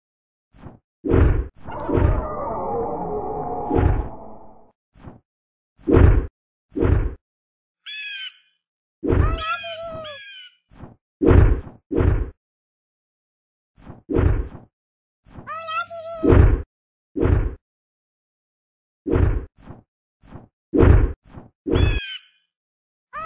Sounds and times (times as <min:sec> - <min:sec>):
Sound effect: 0:00.5 - 0:07.2, 0:09.0 - 0:10.0, 0:10.7 - 0:12.4, 0:13.8 - 0:14.7, 0:15.3 - 0:17.6, 0:19.1 - 0:22.5.